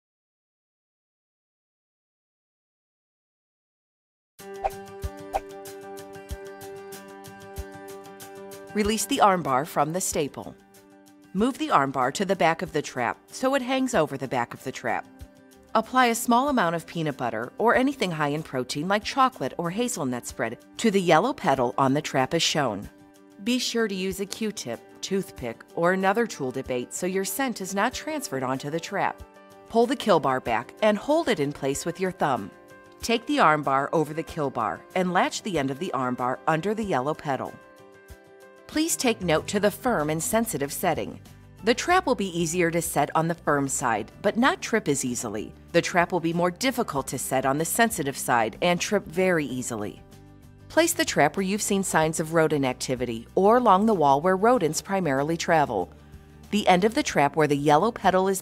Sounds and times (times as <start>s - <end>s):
Music: 4.4s - 58.4s
Speech: 8.8s - 10.6s, 11.4s - 15.1s, 15.8s - 37.6s, 38.7s - 50.0s, 50.7s - 55.9s, 56.5s - 58.4s.